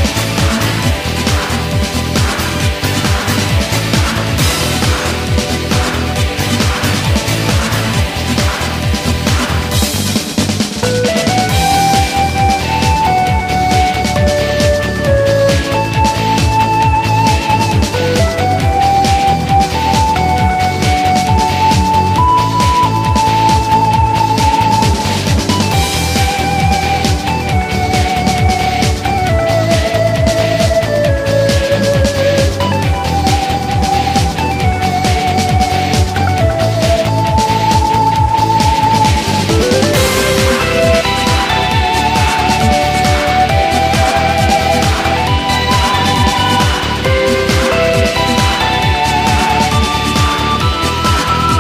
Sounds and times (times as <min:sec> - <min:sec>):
Music: 0:00.0 - 0:51.6.